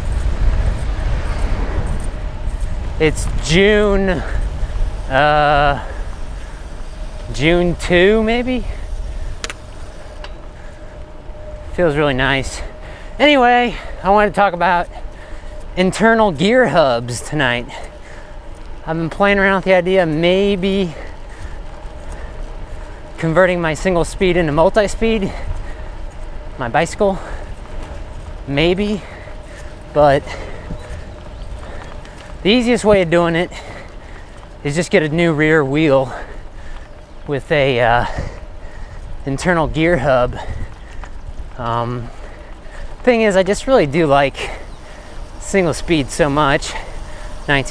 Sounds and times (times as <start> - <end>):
Bicycle: 0.0 - 47.7
Speech: 3.0 - 4.4, 5.1 - 5.9, 7.3 - 8.8, 11.8 - 14.9, 15.8 - 17.8, 18.9 - 21.0, 23.2 - 25.4, 26.6 - 27.3, 28.5 - 29.1, 30.0 - 30.3, 32.4 - 33.6, 34.6 - 36.3, 37.3 - 38.3, 39.2 - 40.5, 41.6 - 42.1, 43.0 - 44.6, 45.4 - 46.9, 47.5 - 47.7.